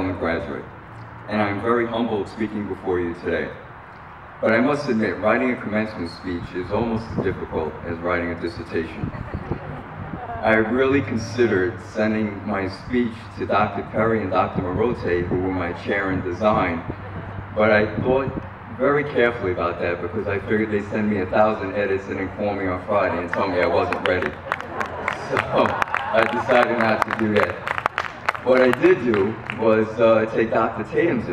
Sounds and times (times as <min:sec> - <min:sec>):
Male speech, man speaking: 0:00.0 - 0:00.7, 0:01.3 - 0:03.6, 0:04.4 - 0:09.1, 0:10.4 - 0:16.9, 0:17.6 - 0:24.4, 0:25.2 - 0:27.7, 0:28.4 - 0:31.3.